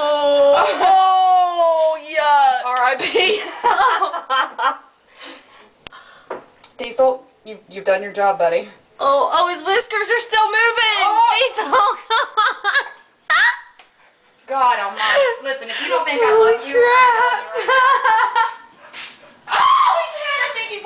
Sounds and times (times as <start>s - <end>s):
Breathing: 5.1s - 6.5s, 14.9s - 16.1s.